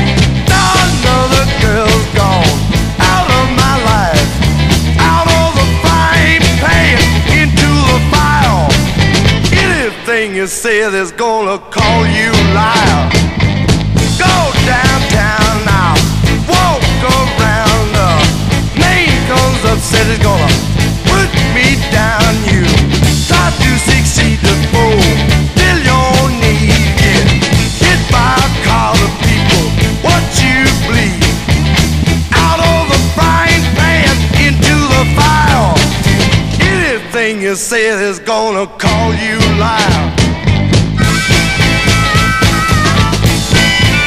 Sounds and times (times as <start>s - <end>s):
Music: 0.0s - 44.0s.